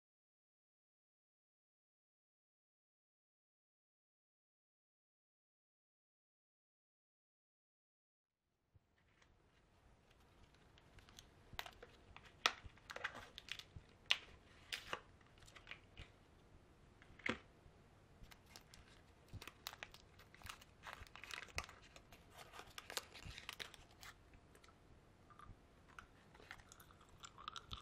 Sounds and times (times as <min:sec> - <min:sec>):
Chewing, mastication: 0:18.2 - 0:27.8.